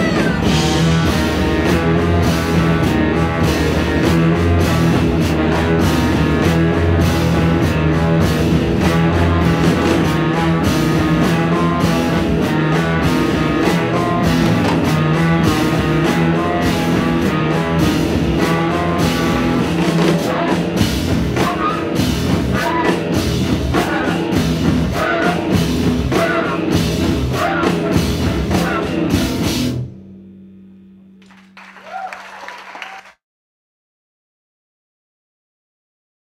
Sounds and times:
Drum: 0.0s - 30.2s
Guitar: 0.0s - 31.7s
Drum kit: 0.0s - 32.2s
Singing: 21.4s - 23.1s, 23.7s - 29.1s.

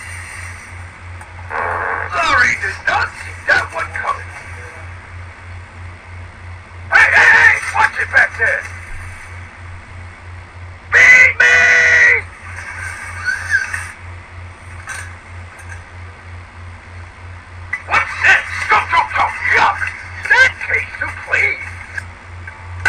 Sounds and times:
Speech: 2.1s - 4.9s, 6.9s - 8.7s, 11.0s - 12.2s, 17.9s - 21.8s.

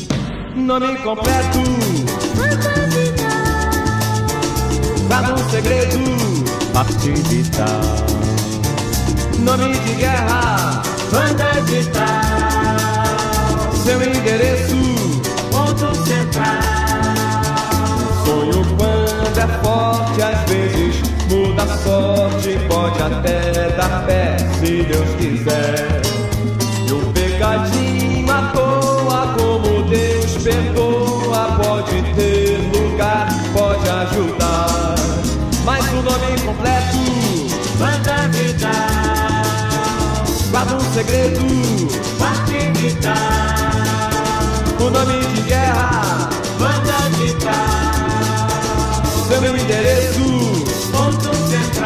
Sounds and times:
Music: 0.0s - 51.8s.

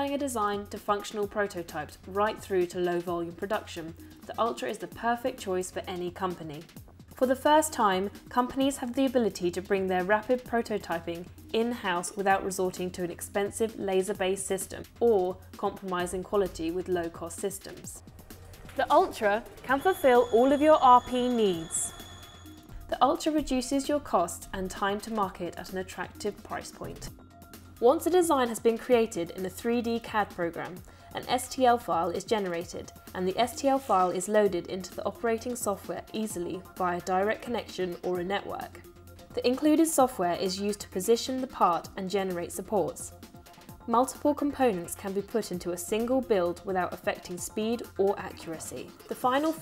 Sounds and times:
Speech: 0.0s - 18.0s, 18.8s - 21.9s, 22.9s - 27.1s, 27.8s - 38.8s, 39.4s - 43.1s, 43.9s - 49.6s
Music: 0.0s - 49.6s.

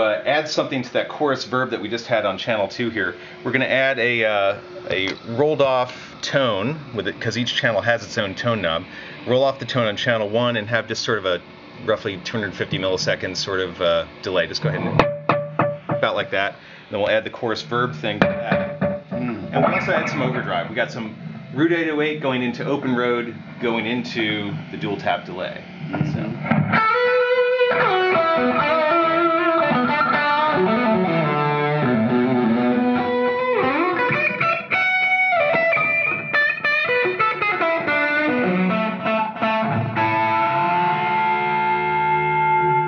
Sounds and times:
Speech: 0.0s - 15.0s, 16.0s - 18.6s, 19.2s - 26.4s
Music: 15.0s - 16.2s, 26.2s - 42.8s.

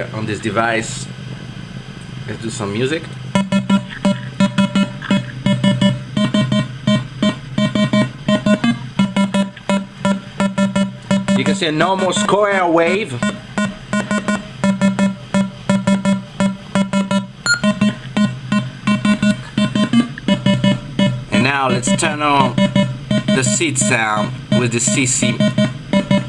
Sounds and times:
Speech: 0.0s - 1.1s, 2.3s - 3.1s, 11.4s - 13.2s, 21.3s - 22.6s, 23.4s - 25.4s.

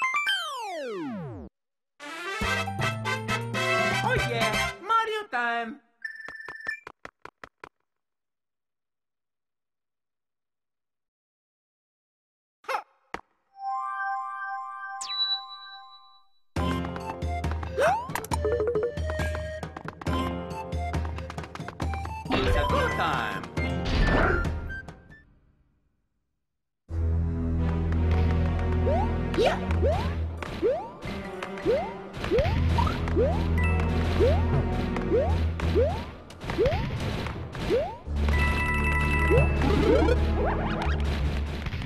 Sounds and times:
Music: 2.0s - 5.0s, 16.6s - 25.3s, 26.9s - 36.2s, 38.1s - 41.8s
Speech: 4.0s - 5.8s, 22.3s - 23.4s.

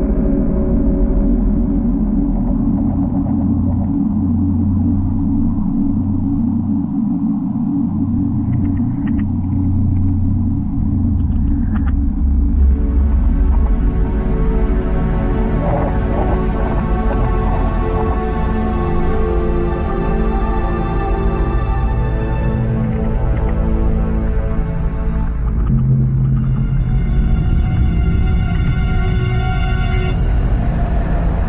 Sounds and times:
Scary music: 0.0s - 31.4s.

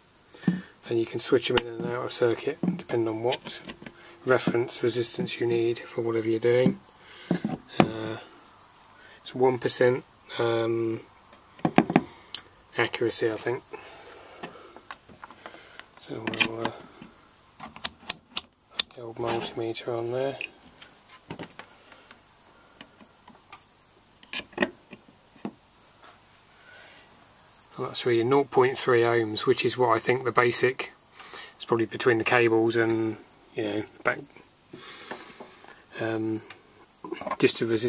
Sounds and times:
Inside, small room: 0.0s - 37.8s
Speech: 0.8s - 3.7s, 4.3s - 6.8s, 7.8s - 8.3s, 9.2s - 11.1s, 12.7s - 13.7s, 16.0s - 16.8s, 18.9s - 20.5s, 27.7s - 31.0s, 31.6s - 34.4s, 35.9s - 36.5s, 37.1s - 37.8s.

